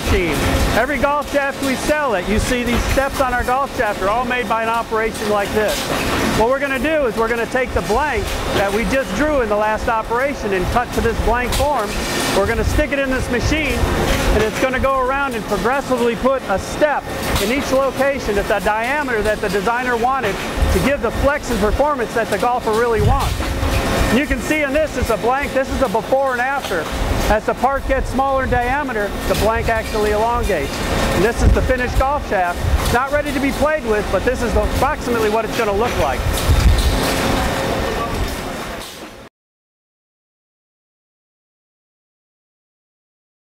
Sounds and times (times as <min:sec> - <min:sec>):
Speech: 0:00.0 - 0:23.4, 0:24.1 - 0:36.3.